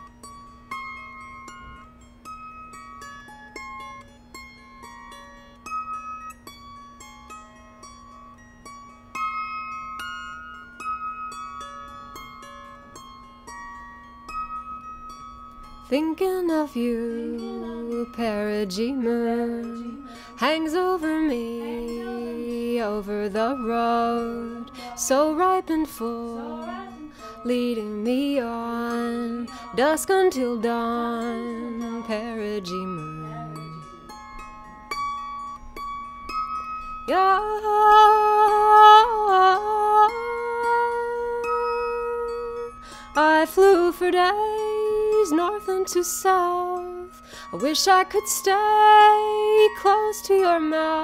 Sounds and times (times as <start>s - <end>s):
Music: 0.0s - 51.0s.